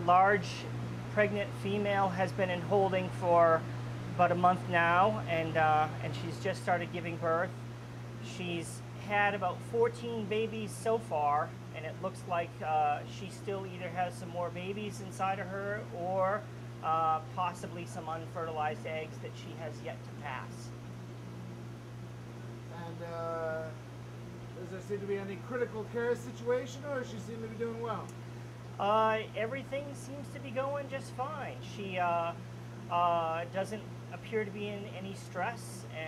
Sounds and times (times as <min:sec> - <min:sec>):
Speech: 0:00.0 - 0:03.6, 0:04.2 - 0:07.5, 0:08.3 - 0:20.7, 0:22.7 - 0:23.8, 0:24.6 - 0:28.1, 0:28.8 - 0:36.0.